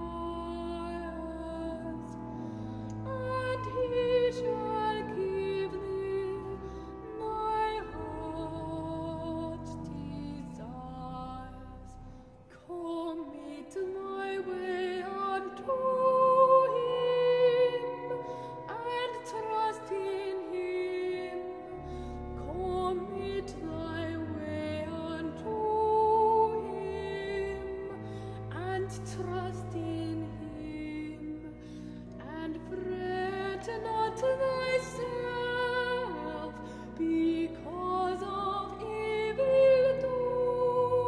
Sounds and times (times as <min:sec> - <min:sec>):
Opera: 0:00.0 - 0:41.0.